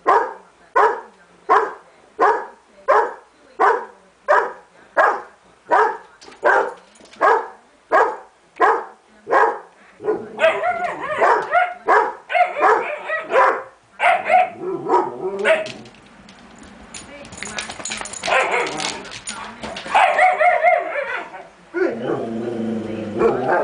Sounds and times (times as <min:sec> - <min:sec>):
Speech: 0:00.0 - 0:14.6, 0:17.0 - 0:23.6
Bark: 0:00.0 - 0:15.8, 0:18.3 - 0:18.7, 0:19.9 - 0:21.3.